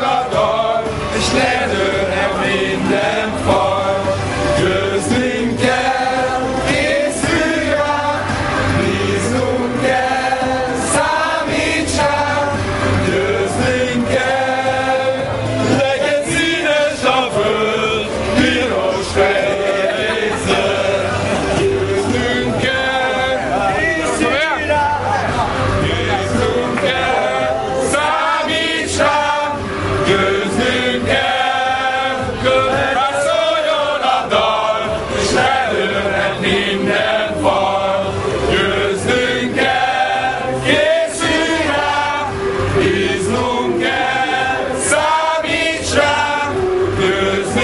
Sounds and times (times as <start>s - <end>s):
Male singing: 0.0s - 47.6s.